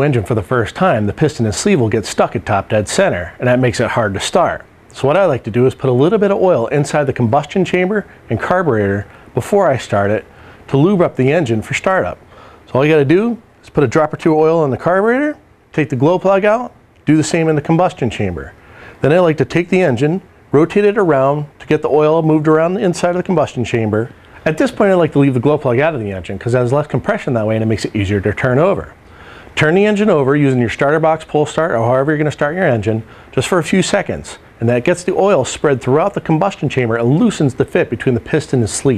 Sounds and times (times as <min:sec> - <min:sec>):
Speech: 0:00.0 - 0:29.0, 0:29.6 - 0:38.9.